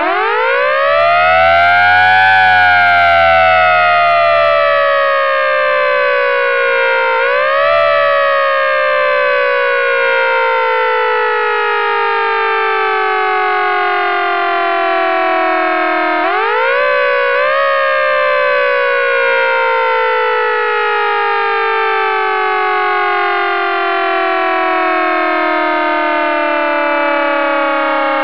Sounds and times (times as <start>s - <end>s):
Fire engine, fire truck (siren): 0.0s - 28.2s.